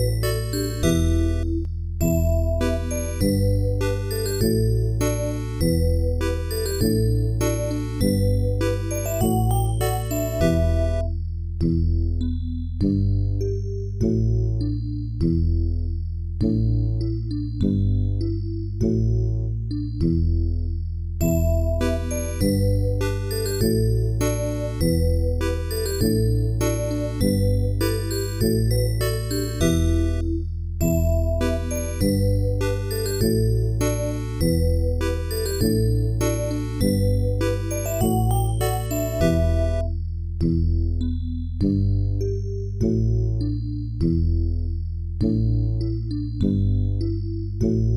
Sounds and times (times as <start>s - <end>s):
Music: 0.0s - 47.9s.